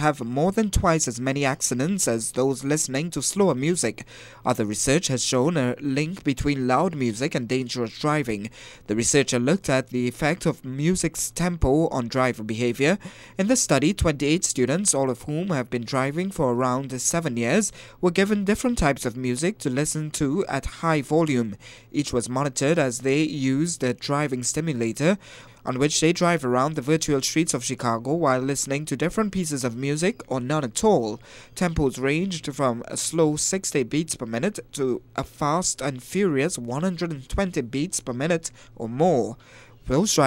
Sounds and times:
Speech: 0:00.0 - 0:40.2.

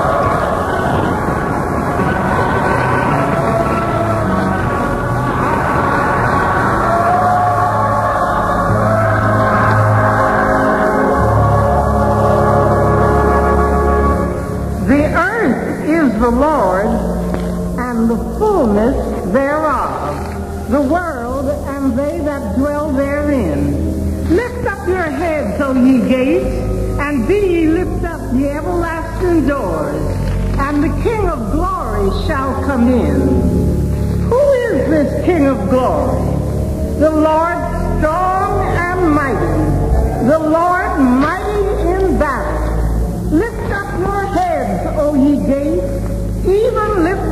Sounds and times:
Music: 0:00.0 - 0:47.3.

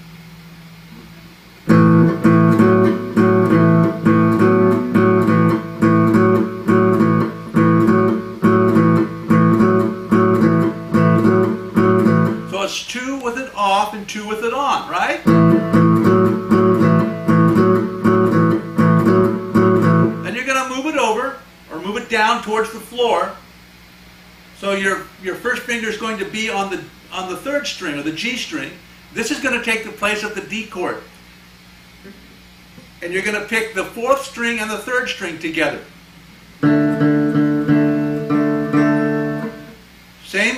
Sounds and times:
Acoustic guitar: 0:00.9 - 0:12.6, 0:15.2 - 0:20.4, 0:36.6 - 0:39.9
Strum: 0:00.9 - 0:12.6, 0:15.2 - 0:20.4, 0:36.6 - 0:39.9
Speech: 0:12.5 - 0:15.3, 0:20.2 - 0:23.4, 0:24.6 - 0:31.1, 0:33.0 - 0:35.9, 0:40.2 - 0:40.5.

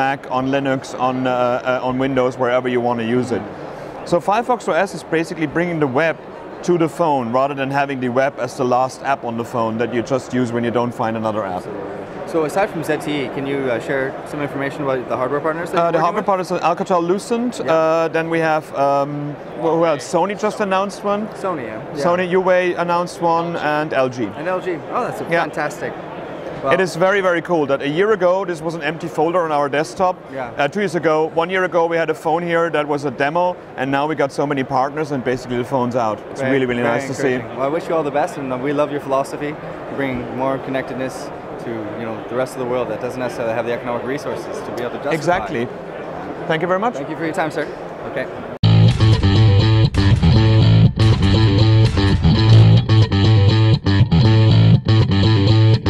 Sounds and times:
Inside, public space: 0:00.0 - 0:55.9
Distortion: 0:48.6 - 0:55.9
Music: 0:48.6 - 0:55.9.

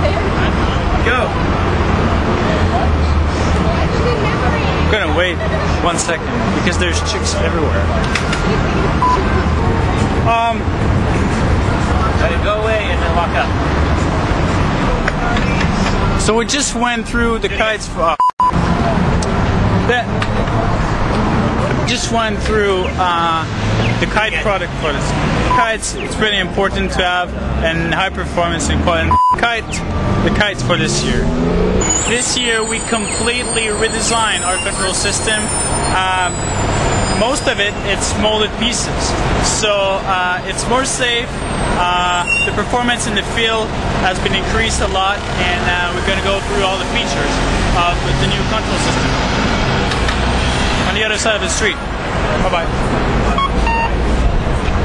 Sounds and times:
Speech: 0:10.1 - 0:10.7, 0:11.8 - 0:13.6, 0:14.8 - 0:18.2, 0:19.8 - 0:20.6, 0:21.7 - 0:31.3, 0:32.0 - 0:36.4, 0:37.2 - 0:49.1, 0:50.8 - 0:52.8.

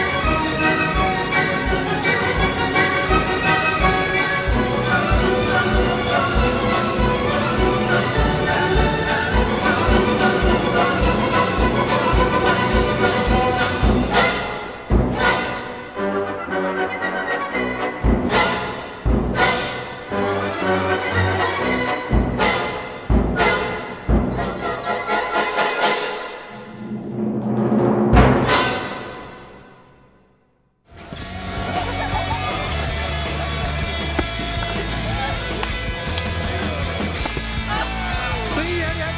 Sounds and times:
Timpani: 0:00.0 - 0:30.3.

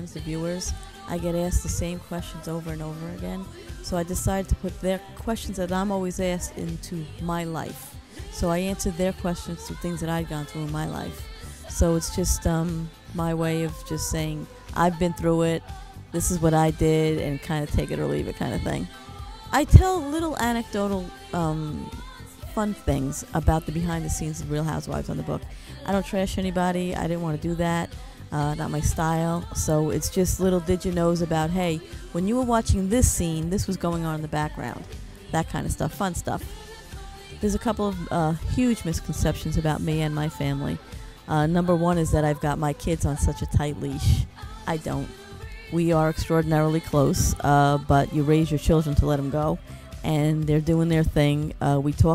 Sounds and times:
Speech: 0:00.0 - 0:18.9, 0:19.5 - 0:36.5, 0:37.4 - 0:52.1
Music: 0:00.0 - 0:52.1.

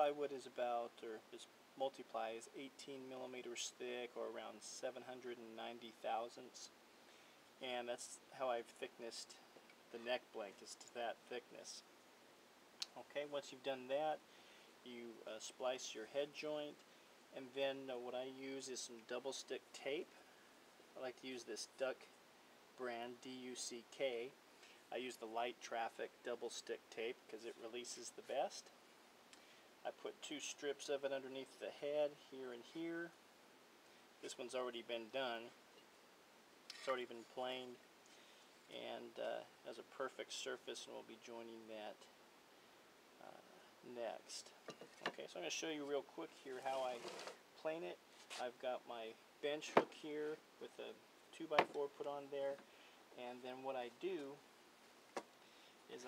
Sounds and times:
Speech: 0:00.0 - 0:06.8, 0:07.6 - 0:11.9, 0:12.8 - 0:14.2, 0:14.8 - 0:20.2, 0:21.0 - 0:22.1, 0:22.8 - 0:28.8, 0:29.8 - 0:33.2, 0:34.2 - 0:35.6, 0:36.7 - 0:37.8, 0:38.7 - 0:42.2, 0:43.2 - 0:52.6, 0:53.2 - 0:54.4.

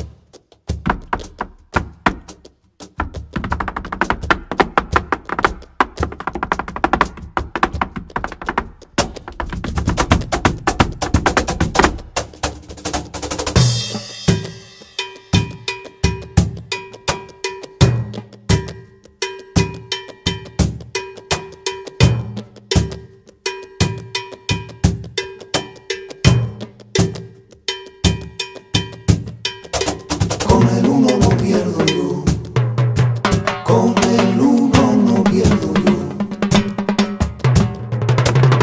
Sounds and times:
Wood block: 0:00.0 - 0:38.6.

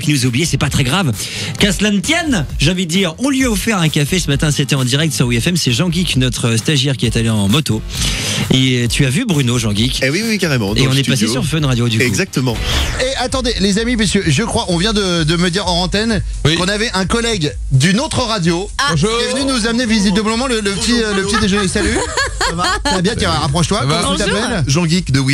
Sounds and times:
Speech: 0:00.0 - 0:07.8, 0:08.4 - 0:25.3
Music: 0:00.0 - 0:25.3.

